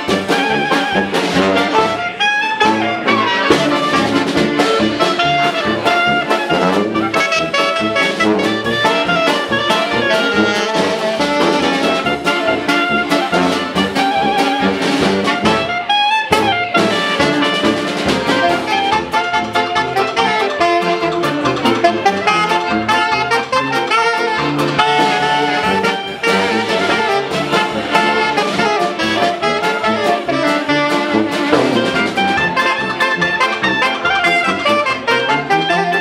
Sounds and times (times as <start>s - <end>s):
Music: 0.0s - 36.0s.